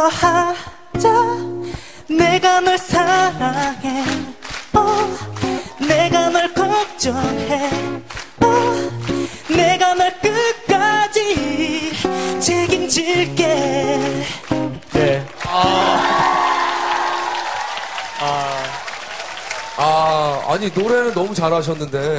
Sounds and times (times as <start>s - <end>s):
Female singing: 0.0s - 14.3s
Music: 0.0s - 17.3s.